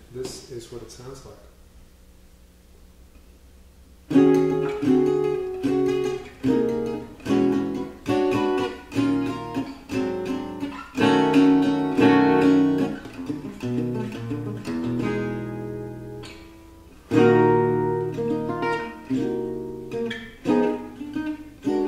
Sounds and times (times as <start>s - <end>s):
Acoustic guitar: 4.1s - 21.8s.